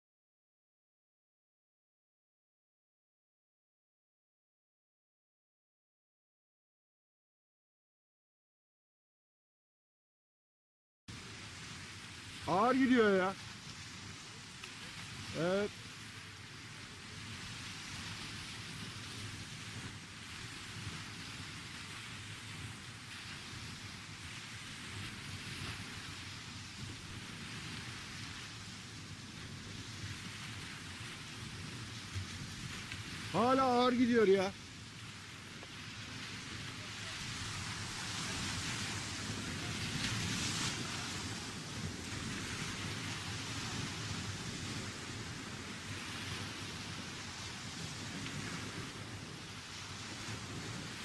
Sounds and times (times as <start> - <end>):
Speech: 12.5 - 13.4, 15.3 - 15.7, 33.3 - 34.6.